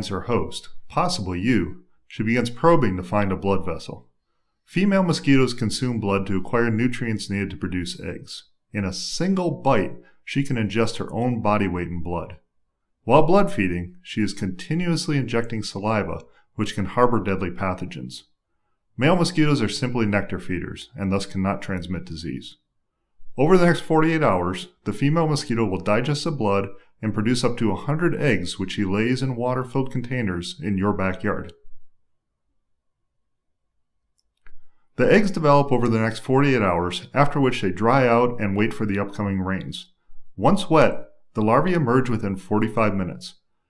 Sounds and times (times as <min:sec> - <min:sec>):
Narration, monologue: 0:00.0 - 0:43.6.